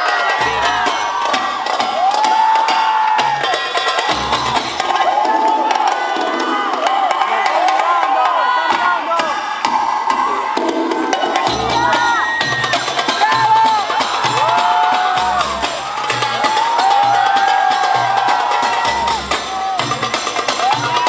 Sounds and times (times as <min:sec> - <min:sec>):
Cheering: 0:00.0 - 0:21.0
Crowd: 0:00.0 - 0:21.0.